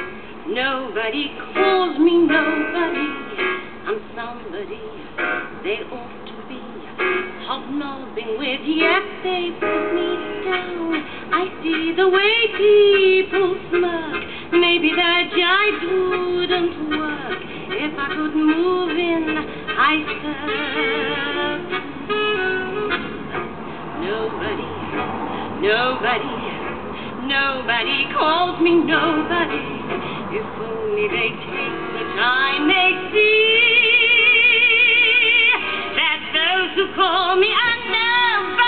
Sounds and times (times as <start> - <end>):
Female singing: 0.0 - 5.0, 5.6 - 21.8, 24.0 - 24.8, 25.6 - 38.6
Music: 1.1 - 25.2, 27.8 - 38.6.